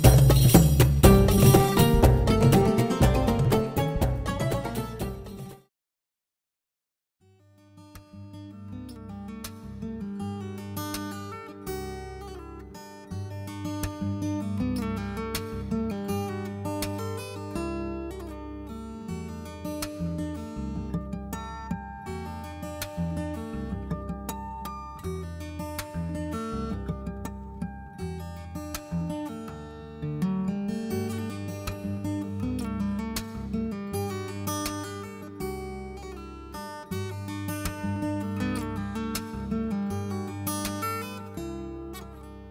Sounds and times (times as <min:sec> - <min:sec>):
Music: 0:00.0 - 0:05.7, 0:07.2 - 0:42.5.